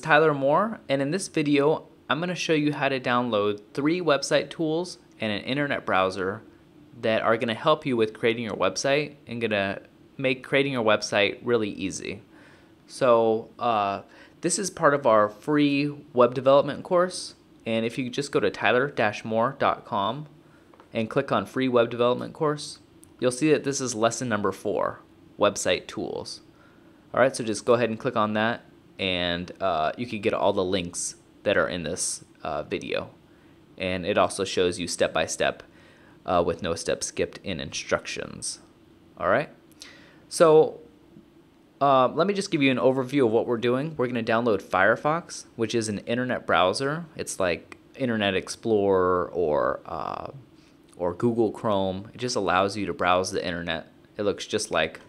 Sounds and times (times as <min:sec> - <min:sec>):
Speech: 0:00.0 - 0:12.3, 0:12.9 - 0:26.5, 0:27.1 - 0:33.2, 0:33.8 - 0:39.6, 0:40.3 - 0:40.9, 0:41.8 - 0:55.0.